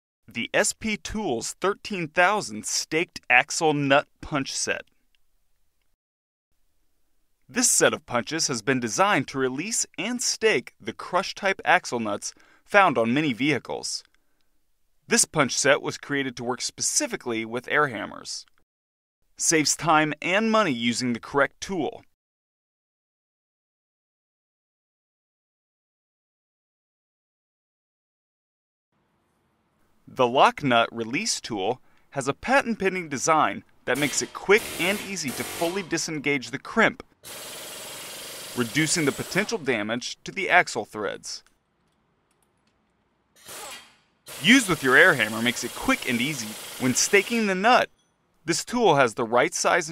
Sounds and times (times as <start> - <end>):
Speech: 0.3 - 4.9, 7.5 - 14.1, 15.1 - 18.5, 19.4 - 22.1, 30.1 - 37.1, 38.6 - 41.5, 44.4 - 47.9, 48.5 - 49.9.